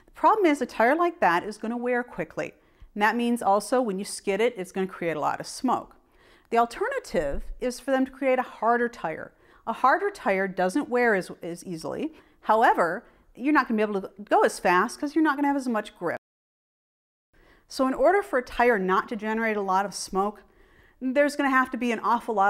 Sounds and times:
Speech: 0:00.2 - 0:16.2, 0:17.7 - 0:20.4, 0:21.0 - 0:22.5.

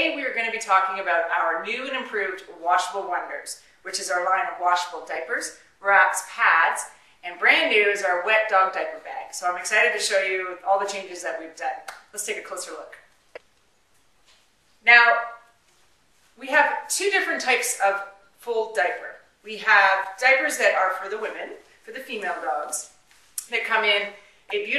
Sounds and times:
Speech: 0:00.0 - 0:13.0, 0:14.8 - 0:15.4, 0:16.4 - 0:24.7.

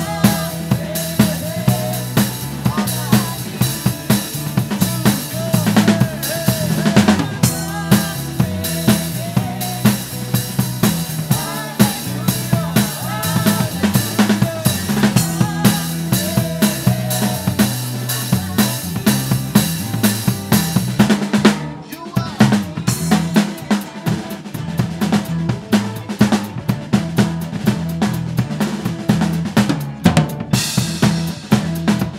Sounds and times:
Bass drum: 0:00.0 - 0:32.1.

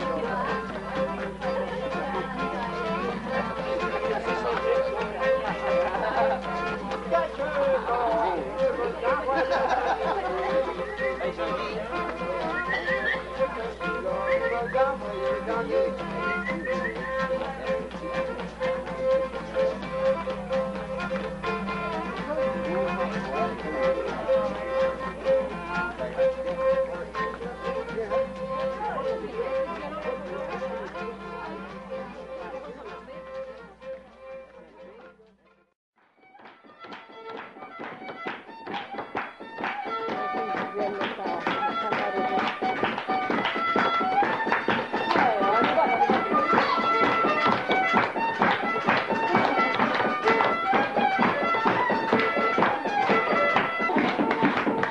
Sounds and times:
Speech: 0:00.0 - 0:35.5, 0:40.1 - 0:54.9
Violin, fiddle: 0:00.0 - 0:54.9.

